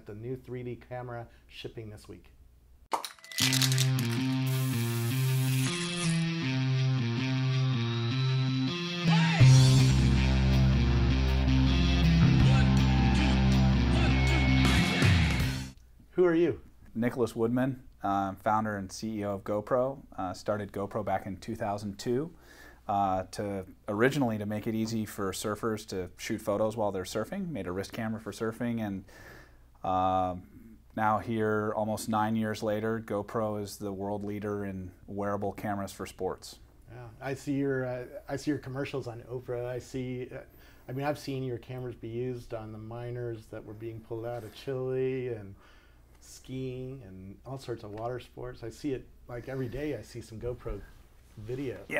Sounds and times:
Speech: 0:00.0 - 0:02.3, 0:16.1 - 0:29.1, 0:29.8 - 0:45.6, 0:46.2 - 0:52.0
Music: 0:03.4 - 0:15.8.

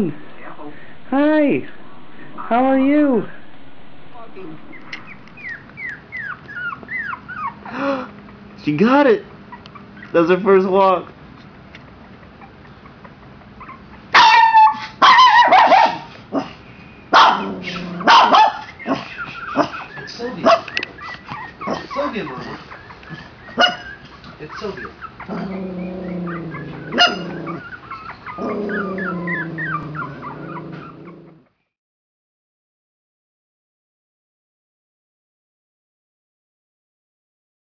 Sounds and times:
Whimper (dog): 0:04.7 - 0:08.1, 0:12.2 - 0:16.5, 0:17.2 - 0:31.6.

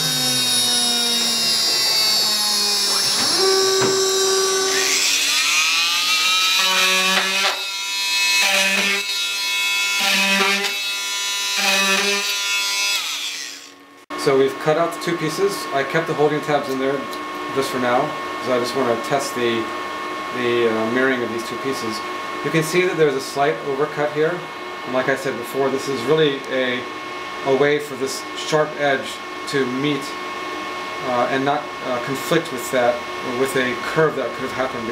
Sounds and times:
Drill: 0:00.0 - 0:13.8
Inside, small room: 0:00.0 - 0:34.9.

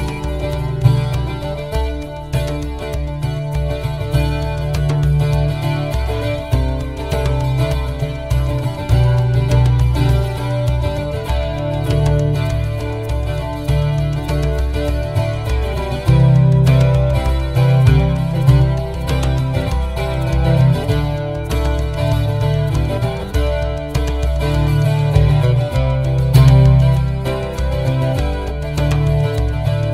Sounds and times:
Music: 0:00.0 - 0:29.9.

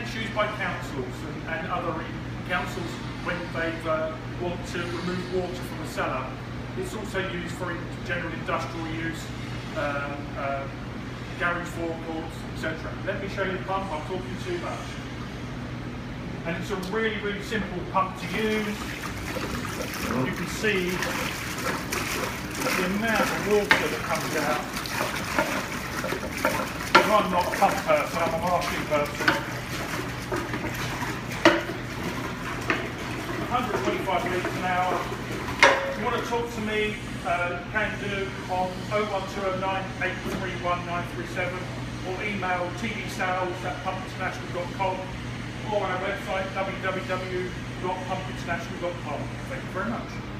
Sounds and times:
Pump (liquid): 0:00.0 - 0:15.4, 0:16.6 - 0:50.3
Water: 0:00.0 - 0:15.4, 0:16.6 - 0:50.3
Water tap, faucet: 0:18.2 - 0:36.3.

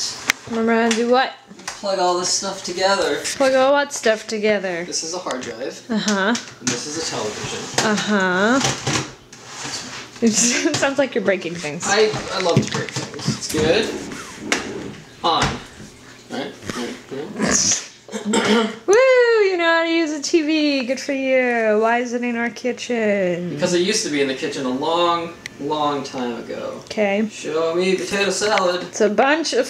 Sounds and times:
Inside, small room: 0:00.0 - 0:29.6.

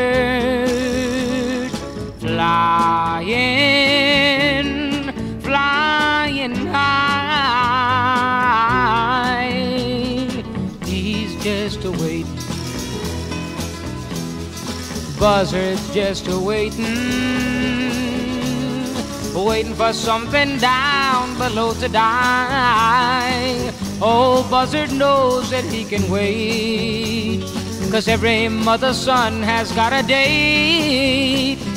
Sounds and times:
Music: 0:00.0 - 0:31.7.

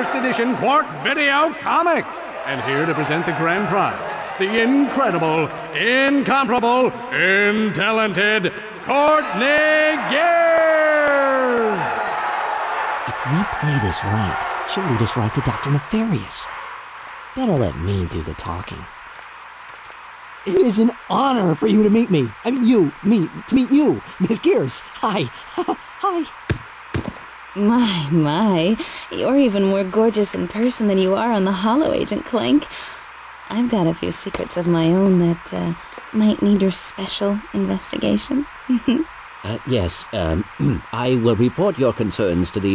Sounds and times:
Speech: 0:00.0 - 0:12.0, 0:13.1 - 0:16.5, 0:17.4 - 0:18.9, 0:20.5 - 0:26.3, 0:27.6 - 0:32.7, 0:33.5 - 0:42.7.

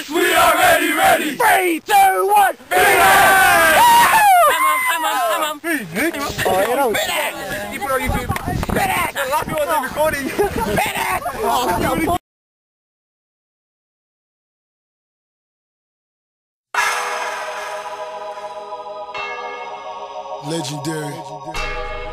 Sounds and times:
Outside, rural or natural: 0:01.6 - 0:12.2
Music: 0:16.8 - 0:22.1.

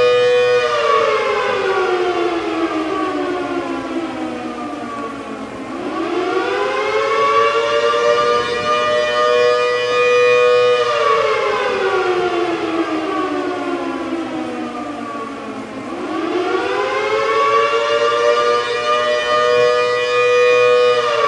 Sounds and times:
Civil defense siren: 0:00.0 - 0:21.2.

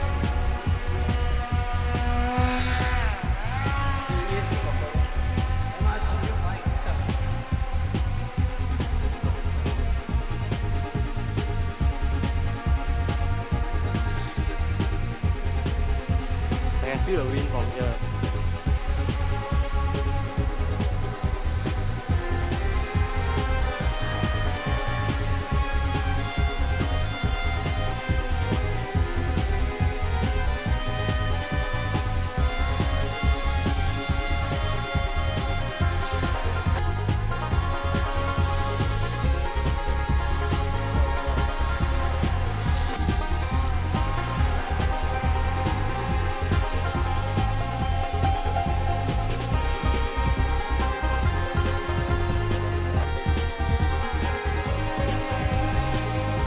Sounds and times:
Music: 0:00.0 - 0:56.4
Speech: 0:04.0 - 0:07.3, 0:16.8 - 0:18.1.

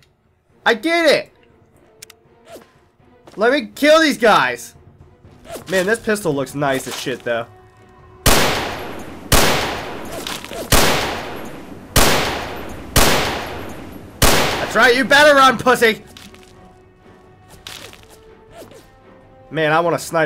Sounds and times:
Gunshot, gunfire: 0:08.3 - 0:14.8.

